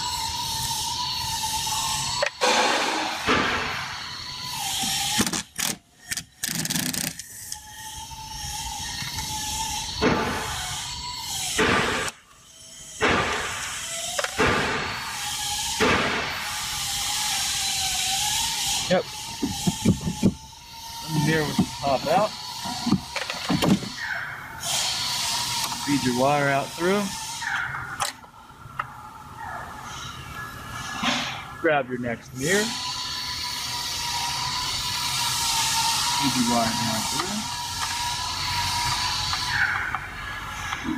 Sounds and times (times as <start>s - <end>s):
Outside, urban or manmade: 0.0s - 40.9s
Vehicle: 21.1s - 40.9s.